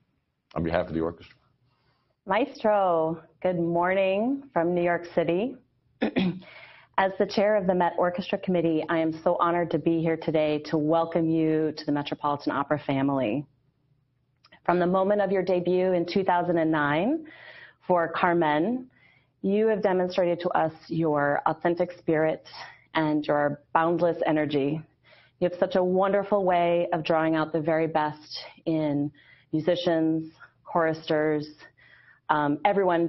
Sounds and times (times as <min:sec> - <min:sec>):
Speech: 0:00.5 - 0:01.3, 0:02.3 - 0:06.4, 0:07.0 - 0:13.4, 0:14.7 - 0:17.2, 0:17.9 - 0:18.8, 0:19.4 - 0:24.8, 0:25.4 - 0:31.6, 0:32.3 - 0:33.0.